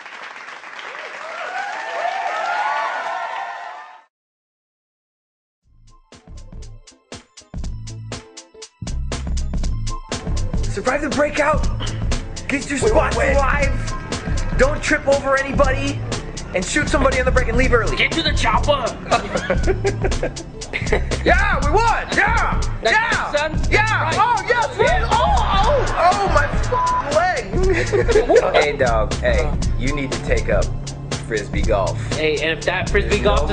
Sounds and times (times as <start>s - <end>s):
Music: 5.6s - 33.5s.